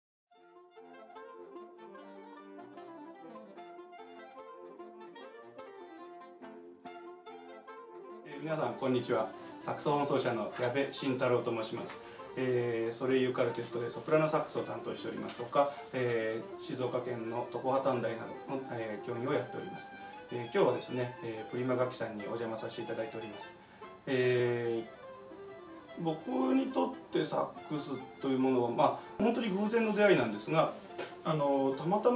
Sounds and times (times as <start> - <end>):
Music: 0.3 - 32.1
Speech: 8.3 - 24.9, 26.0 - 32.1.